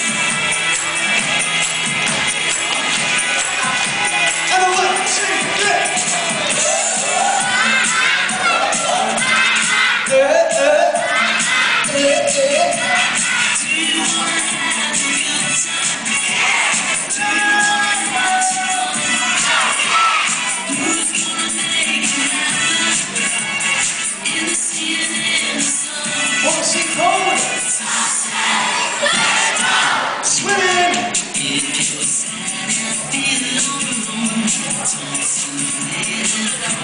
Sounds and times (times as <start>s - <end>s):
Music: 0.0s - 36.8s.